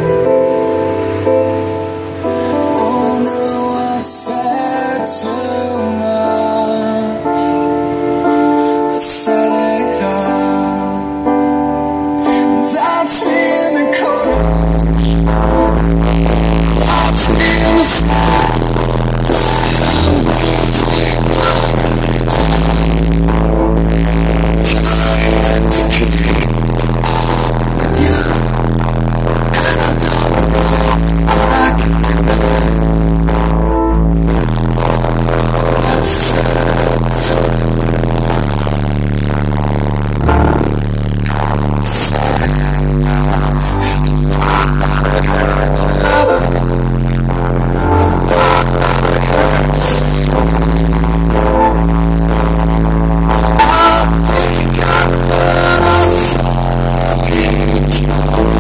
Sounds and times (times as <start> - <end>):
Music: 0.0 - 58.6.